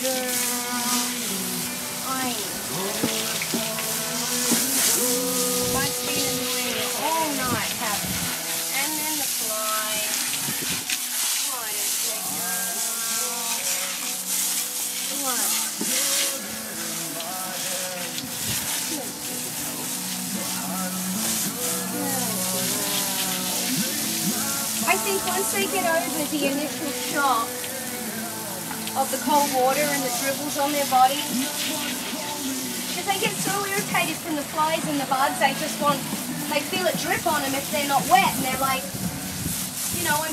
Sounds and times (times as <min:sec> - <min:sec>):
Music: 0:00.0 - 0:40.3
Speech: 0:02.0 - 0:02.5, 0:05.7 - 0:08.1, 0:08.7 - 0:10.2, 0:11.4 - 0:12.6, 0:15.1 - 0:15.7, 0:21.9 - 0:22.6, 0:24.8 - 0:27.5, 0:28.9 - 0:31.4, 0:33.0 - 0:38.9, 0:39.9 - 0:40.3.